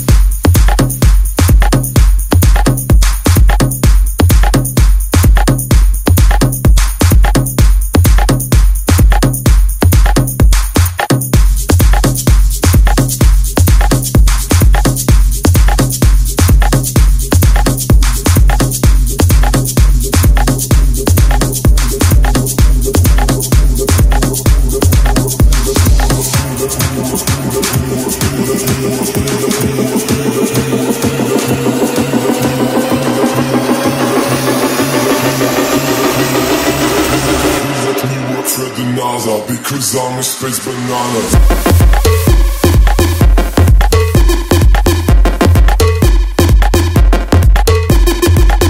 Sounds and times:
House music: 0.0 - 48.6.

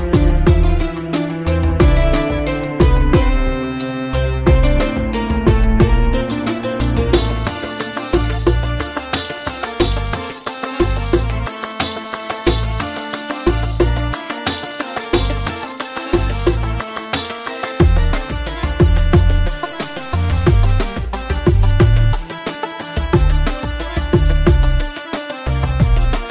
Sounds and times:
Music: 0.0 - 26.3.

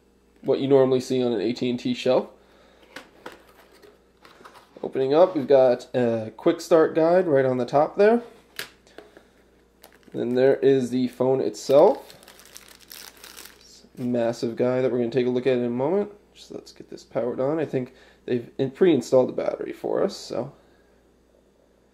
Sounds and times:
Speech: 0.4 - 2.4, 4.8 - 8.3, 10.2 - 12.1, 13.6 - 20.6
Crumpling, crinkling: 9.8 - 10.4, 11.6 - 14.1.

